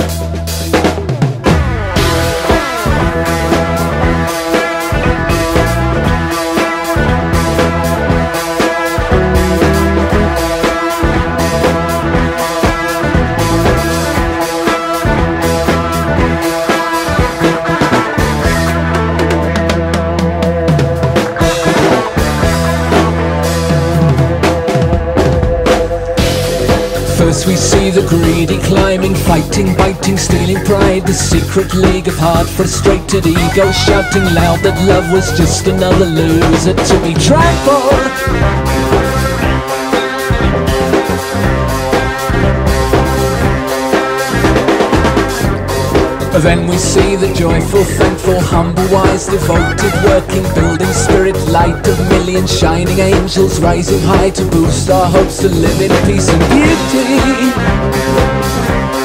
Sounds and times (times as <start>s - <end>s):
Music: 0.0s - 59.0s.